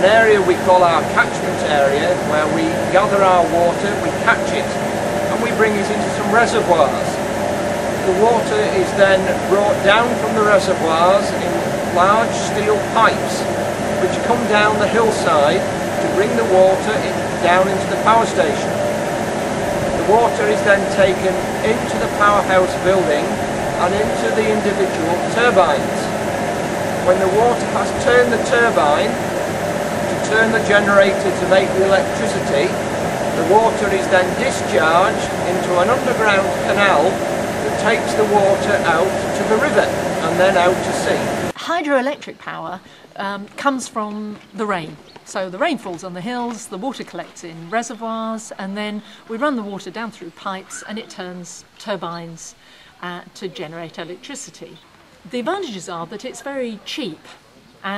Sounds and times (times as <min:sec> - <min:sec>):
Speech: 0:00.0 - 0:07.2, 0:08.0 - 0:18.7, 0:20.0 - 0:26.2, 0:27.1 - 0:29.2, 0:30.1 - 0:32.8, 0:33.4 - 0:57.9.